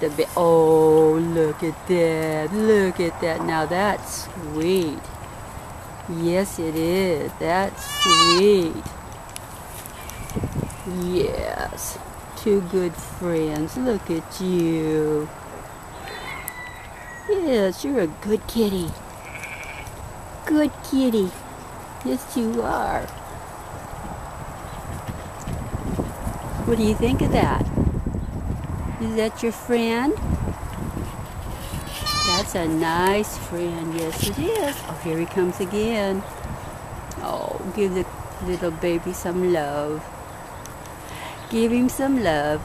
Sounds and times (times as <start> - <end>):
Speech: 0.0 - 5.0, 6.1 - 8.9, 10.9 - 15.3, 17.3 - 19.0, 20.5 - 21.4, 22.0 - 23.1, 26.7 - 27.7, 29.0 - 30.2, 32.3 - 36.2, 37.2 - 40.0, 41.5 - 42.6
Animal: 15.9 - 17.4, 19.2 - 20.0.